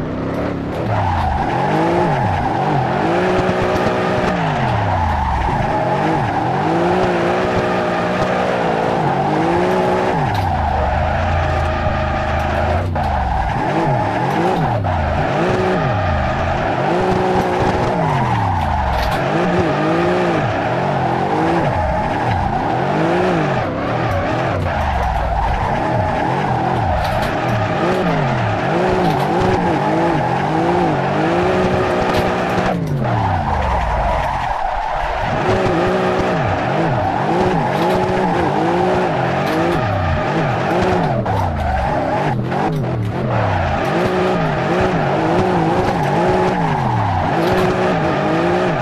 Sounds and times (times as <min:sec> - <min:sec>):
Race car, auto racing: 0:00.0 - 0:48.8.